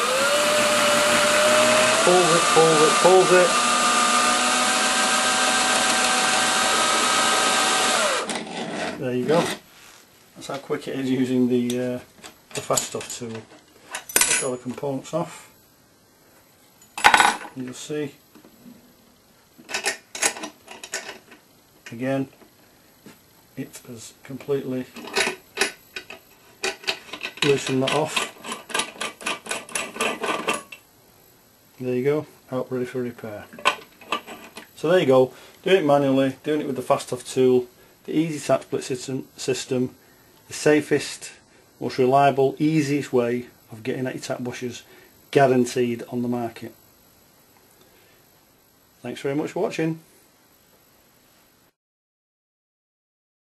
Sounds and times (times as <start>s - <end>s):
Power tool: 0.0s - 9.6s.